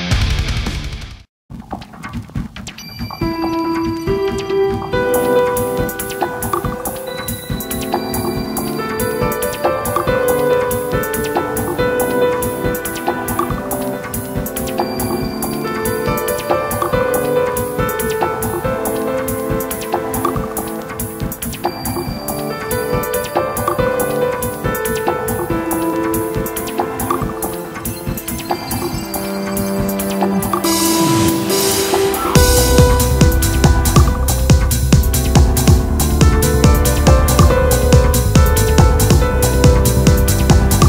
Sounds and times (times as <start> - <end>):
Music: 0.0 - 40.8.